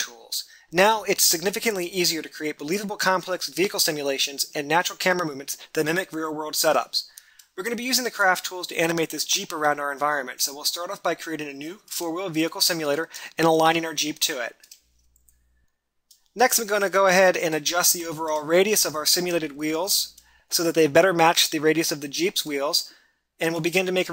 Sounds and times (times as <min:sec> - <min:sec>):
Speech: 0:00.0 - 0:14.6, 0:16.4 - 0:24.1.